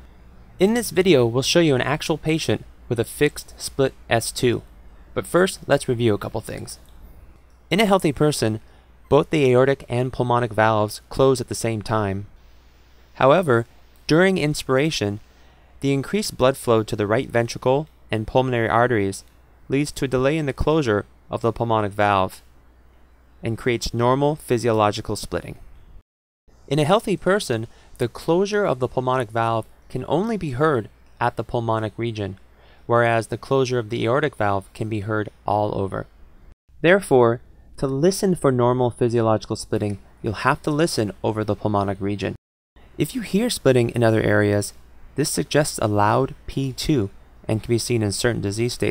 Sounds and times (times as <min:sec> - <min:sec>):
Speech: 0:00.6 - 0:04.6, 0:05.2 - 0:06.8, 0:07.7 - 0:12.3, 0:13.2 - 0:15.2, 0:15.8 - 0:22.4, 0:23.4 - 0:25.6, 0:26.7 - 0:36.1, 0:36.8 - 0:42.4, 0:43.0 - 0:48.9.